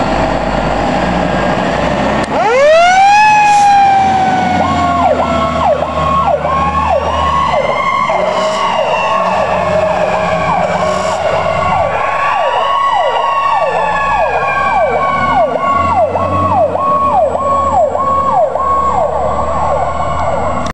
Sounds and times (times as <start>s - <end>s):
Vehicle: 0.0s - 20.7s.